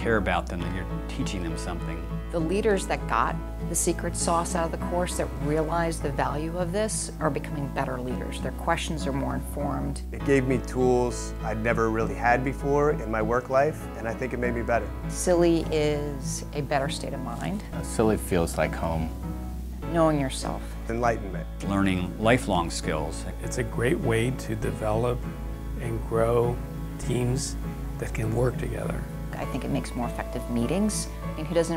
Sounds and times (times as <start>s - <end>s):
Speech: 0.0s - 2.0s, 9.7s - 14.8s, 16.8s - 19.1s, 20.9s - 25.2s, 25.8s - 29.0s
Music: 0.0s - 31.7s.